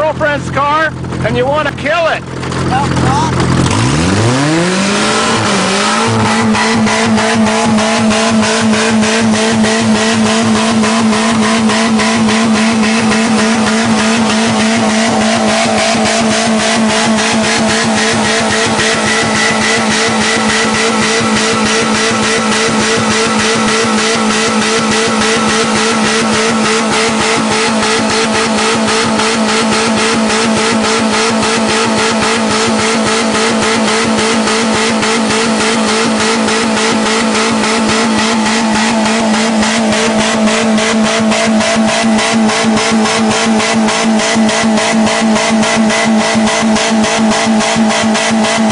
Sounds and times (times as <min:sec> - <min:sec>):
Medium engine (mid frequency): 0:00.0 - 0:48.7
Vehicle: 0:00.0 - 0:48.7
Accelerating, revving, vroom: 0:03.3 - 0:48.7.